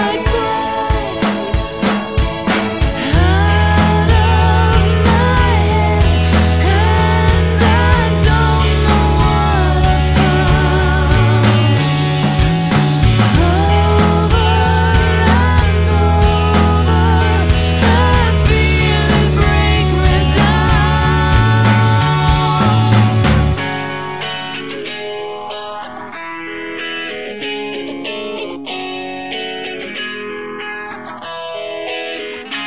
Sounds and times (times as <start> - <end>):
Music: 0.0 - 32.6.